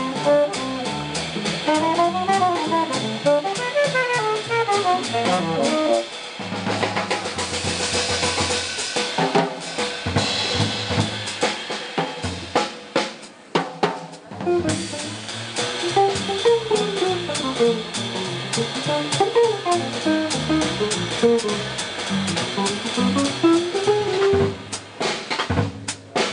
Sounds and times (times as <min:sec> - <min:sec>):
Bass guitar: 0:00.0 - 0:08.7, 0:14.4 - 0:26.3
Drum: 0:00.0 - 0:26.3
Drum kit: 0:00.0 - 0:26.3.